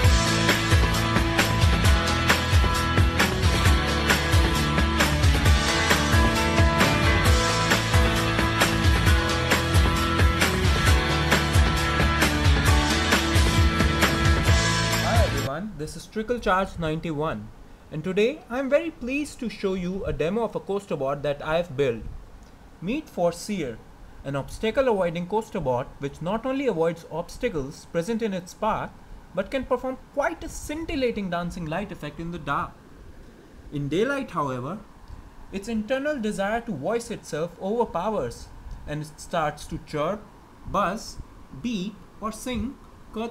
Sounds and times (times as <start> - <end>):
Speech: 15.0 - 22.1, 22.8 - 32.8, 33.8 - 34.8, 35.6 - 43.3.